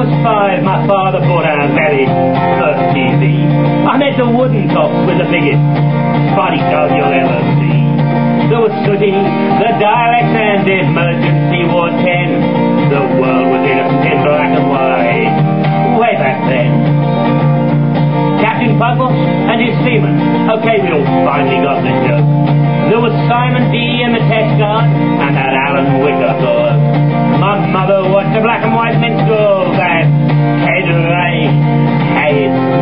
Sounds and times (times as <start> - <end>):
Speech: 0.0 - 5.6, 6.3 - 7.8, 8.5 - 16.8, 18.4 - 22.2, 22.9 - 26.8, 27.4 - 31.5, 32.2 - 32.6
Music: 0.0 - 32.8.